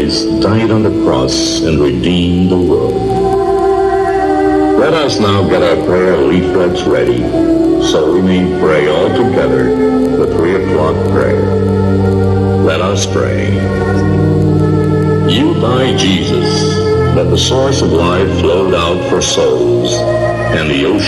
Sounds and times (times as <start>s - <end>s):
Speech: 0.0s - 3.0s, 4.8s - 11.5s, 12.6s - 14.2s, 15.3s - 21.0s
Music: 0.0s - 21.0s.